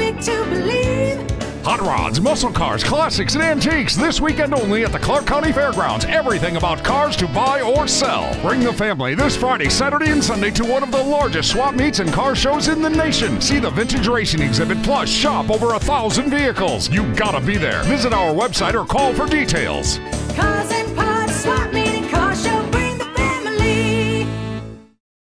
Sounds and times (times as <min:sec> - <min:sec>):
Music: 0:00.0 - 0:25.0
Speech: 0:01.7 - 0:20.0.